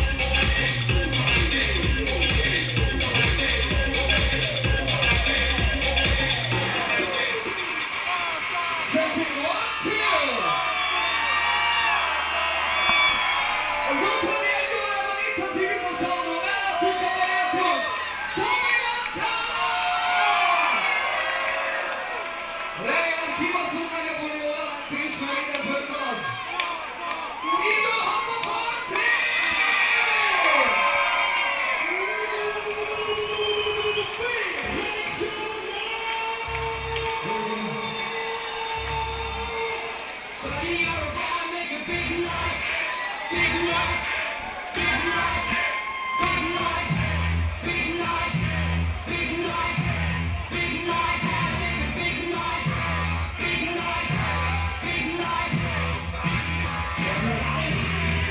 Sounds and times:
Music: 0.0s - 7.2s, 34.6s - 41.0s, 46.2s - 58.3s
Speech: 6.6s - 10.6s, 13.9s - 19.8s, 22.8s - 29.4s, 40.4s - 44.2s, 50.5s - 52.7s.

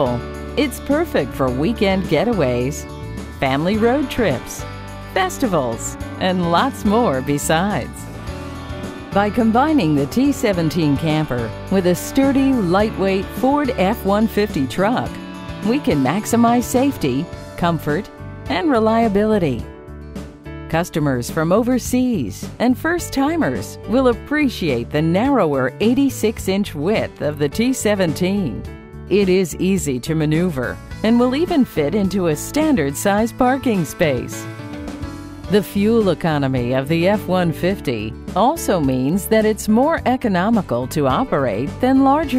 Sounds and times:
Speech: 0.0s - 2.8s, 3.4s - 4.6s, 5.2s - 8.0s, 9.2s - 19.7s, 20.7s - 34.4s, 35.5s - 42.3s
Music: 0.0s - 42.3s.

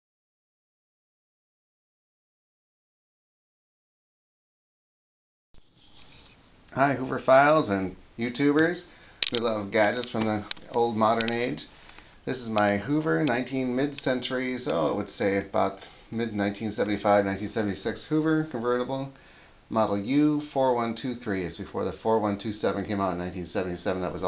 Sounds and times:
Speech: 6.7s - 24.2s.

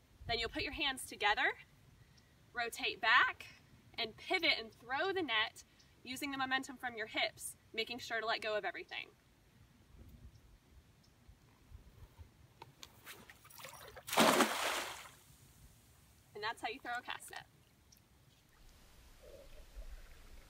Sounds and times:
Speech: 2.6s - 9.2s, 16.4s - 17.5s.

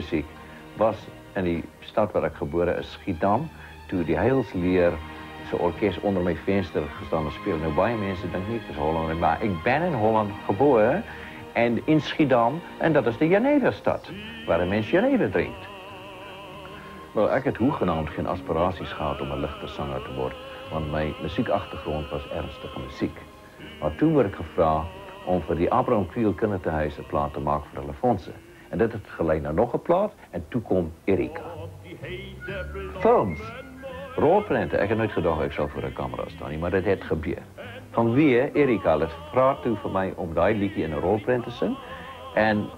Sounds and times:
Speech: 0.0s - 15.7s, 17.2s - 23.2s, 23.8s - 32.2s, 33.0s - 33.6s, 34.2s - 41.8s, 42.4s - 42.7s
Music: 0.0s - 42.7s
Male singing: 4.0s - 29.8s, 30.7s - 42.7s.

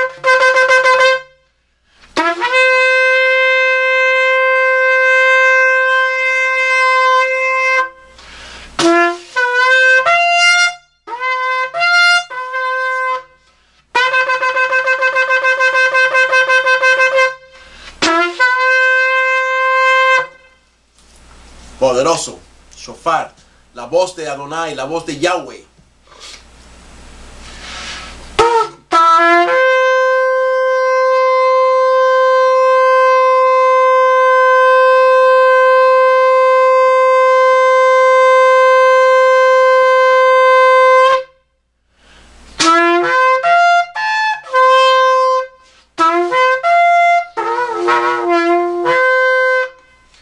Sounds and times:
Wind instrument, woodwind instrument: 0.0s - 1.4s, 2.2s - 8.2s, 8.8s - 13.4s, 14.0s - 20.6s, 28.4s - 41.4s, 42.6s - 50.2s
Shofar: 0.0s - 8.2s, 8.8s - 20.7s, 28.4s - 41.6s, 42.6s - 50.2s.

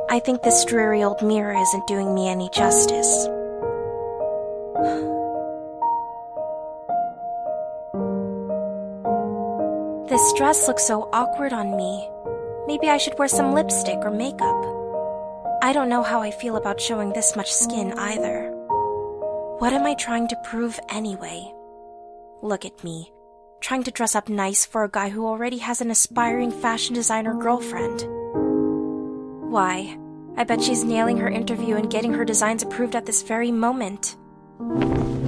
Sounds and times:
Music: 0.0s - 35.2s
Speech: 0.1s - 3.3s, 10.1s - 12.1s, 12.7s - 14.7s, 15.6s - 18.5s, 19.6s - 21.5s, 22.4s - 28.0s, 29.5s - 34.2s.

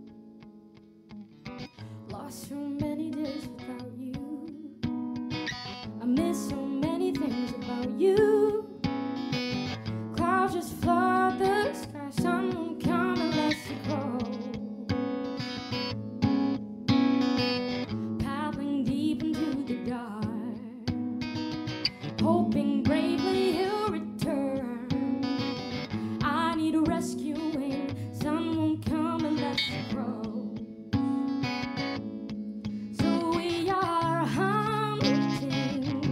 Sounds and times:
Music: 0.0s - 36.1s.

